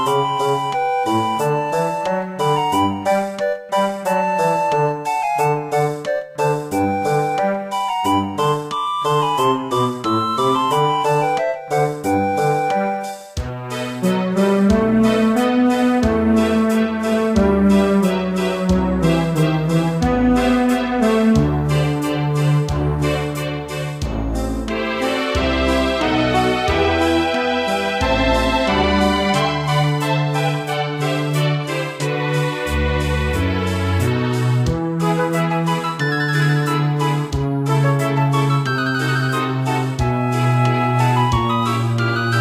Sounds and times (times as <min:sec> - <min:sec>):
Music: 0:00.0 - 0:42.4.